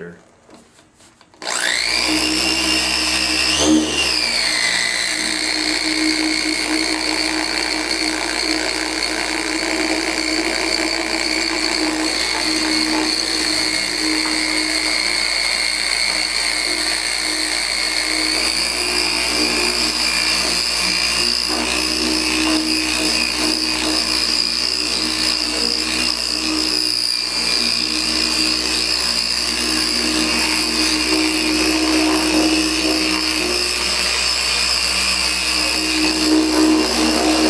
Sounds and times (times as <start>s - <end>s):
Power tool: 1.2s - 37.5s.